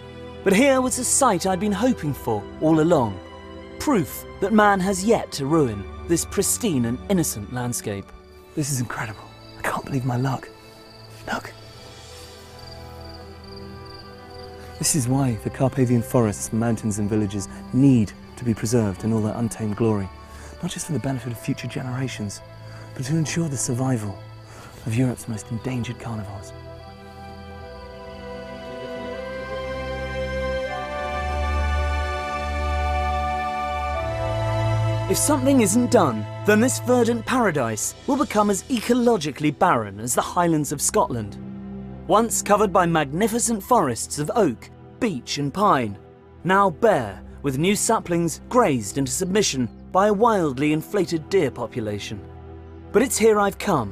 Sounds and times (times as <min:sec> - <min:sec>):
Background music: 0:00.0 - 0:53.9.